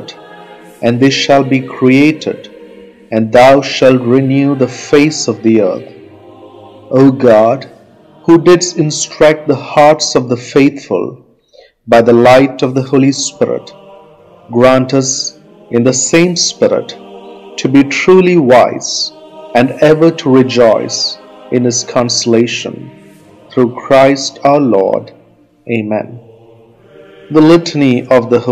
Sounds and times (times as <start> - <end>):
Music: 0.0 - 28.5
Speech: 0.8 - 2.4, 3.2 - 5.9, 7.0 - 7.7, 8.3 - 11.2, 11.9 - 13.7, 14.5 - 17.0, 17.6 - 22.9, 23.6 - 25.1, 25.7 - 26.3, 27.3 - 28.5.